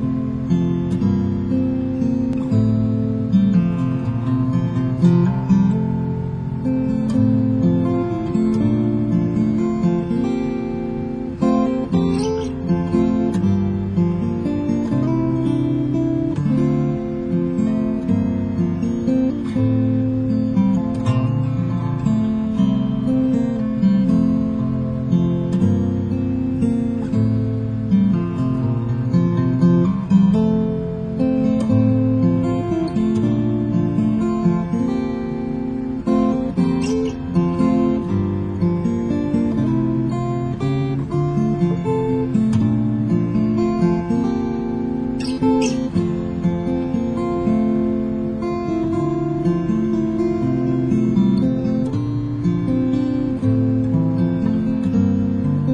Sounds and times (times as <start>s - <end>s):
Acoustic guitar: 0.0s - 55.7s
Strum: 0.0s - 55.7s.